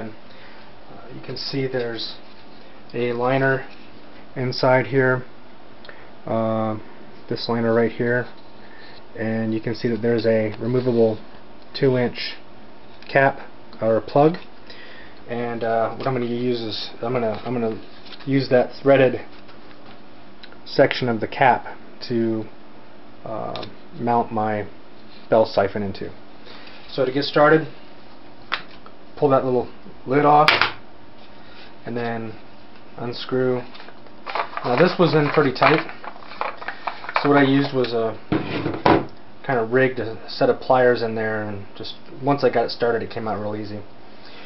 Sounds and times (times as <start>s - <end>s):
Speech: 0.0s - 0.2s, 0.9s - 2.2s, 2.9s - 3.7s, 4.4s - 5.3s, 6.3s - 8.4s, 9.2s - 12.4s, 13.1s - 14.5s, 15.3s - 19.3s, 20.7s - 22.6s, 23.2s - 26.2s, 26.9s - 27.8s, 29.2s - 30.7s, 31.8s - 32.4s, 33.0s - 33.7s, 34.6s - 35.9s, 37.2s - 38.2s, 39.4s - 43.9s.